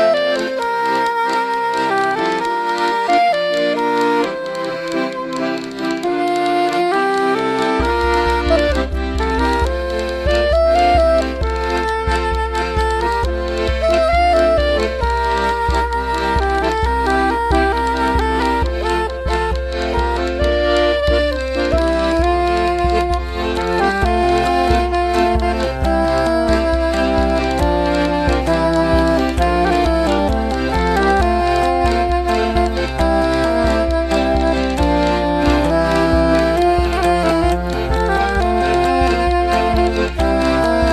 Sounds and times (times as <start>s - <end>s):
Music: 0.0s - 40.9s.